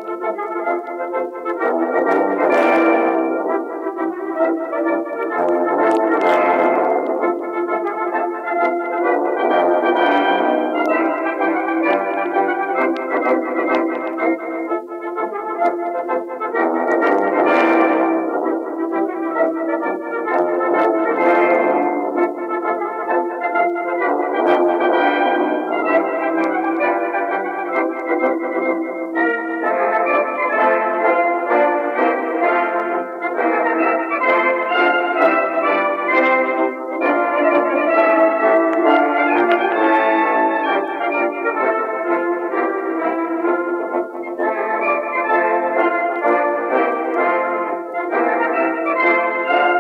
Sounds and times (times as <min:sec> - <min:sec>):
Musical instrument: 0:00.0 - 0:49.8.